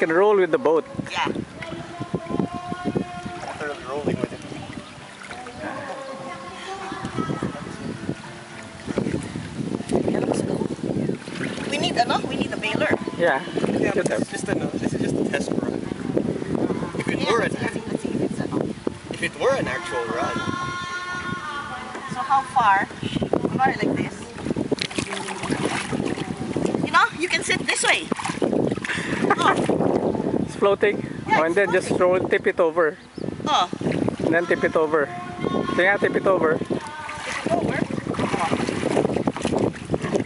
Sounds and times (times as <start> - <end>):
Wind noise (microphone): 0.0 - 40.2.